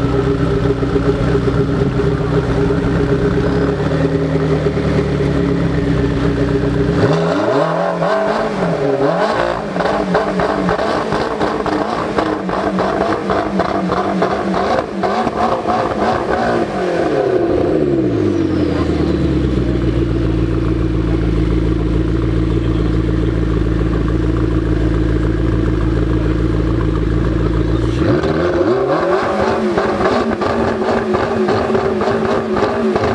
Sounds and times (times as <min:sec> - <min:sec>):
Car: 0:00.0 - 0:33.1
Accelerating, revving, vroom: 0:06.9 - 0:18.3, 0:27.9 - 0:33.1.